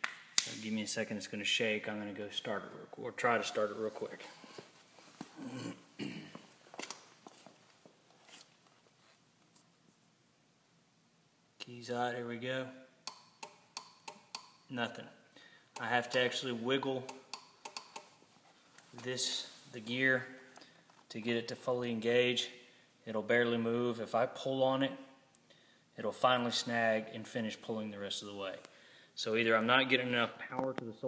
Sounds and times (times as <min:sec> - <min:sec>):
Speech: 0:00.5 - 0:04.3, 0:11.6 - 0:12.8, 0:14.7 - 0:15.2, 0:15.8 - 0:17.1, 0:18.9 - 0:20.4, 0:21.1 - 0:25.1, 0:26.0 - 0:28.6, 0:29.2 - 0:31.0.